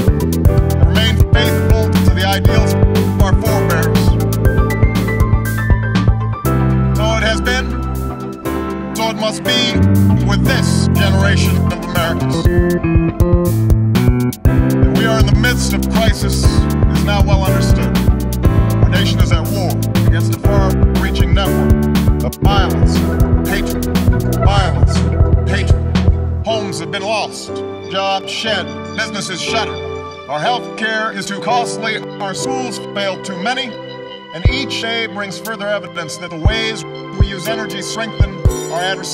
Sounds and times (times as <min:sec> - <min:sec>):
Music: 0:00.0 - 0:39.1
Male speech, man speaking: 0:00.8 - 0:04.2, 0:07.0 - 0:07.8, 0:09.0 - 0:12.5, 0:14.9 - 0:18.0, 0:18.8 - 0:23.8, 0:24.4 - 0:25.8, 0:26.5 - 0:39.1.